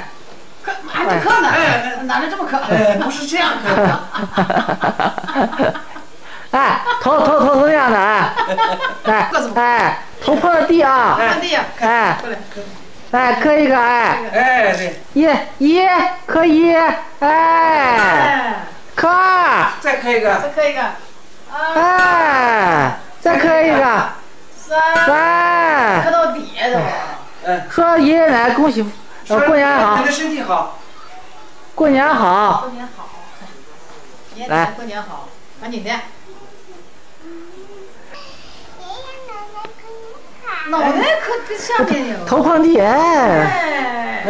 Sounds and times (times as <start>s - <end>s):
Child speech, kid speaking: 36.3s - 41.6s.